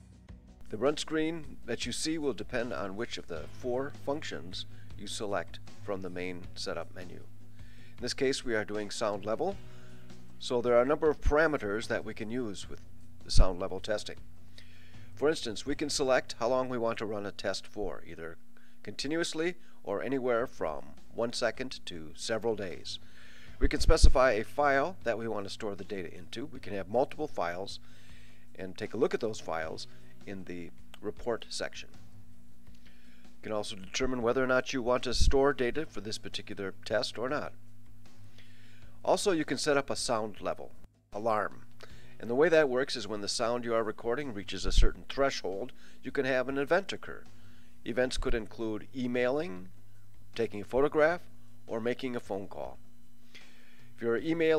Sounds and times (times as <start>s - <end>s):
Speech: 0.7s - 7.3s, 8.0s - 9.6s, 10.4s - 14.2s, 15.2s - 23.0s, 23.6s - 27.8s, 28.6s - 31.9s, 33.4s - 37.6s, 39.0s - 41.6s, 42.2s - 47.2s, 47.8s - 49.7s, 50.4s - 52.8s, 54.0s - 54.5s.